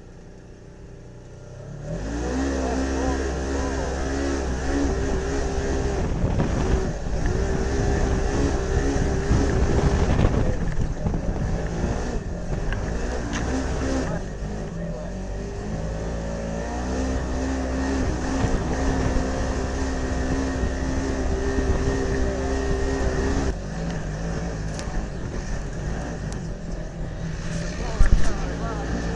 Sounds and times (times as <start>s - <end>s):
Speech: 2.2s - 4.3s, 13.7s - 15.3s, 27.6s - 29.1s.